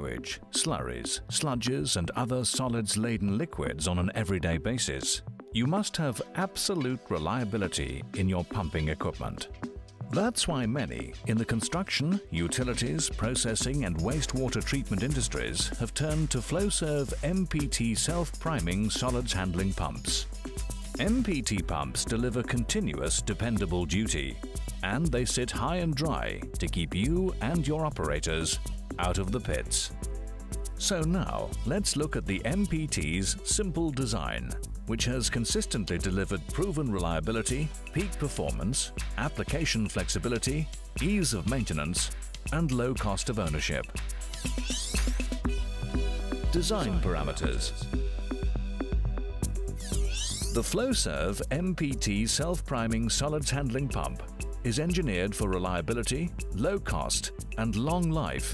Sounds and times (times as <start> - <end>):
Speech: 0.0 - 9.5, 10.1 - 20.3, 21.0 - 29.9, 30.8 - 44.0, 46.5 - 47.9, 50.6 - 58.5
Music: 0.0 - 58.5.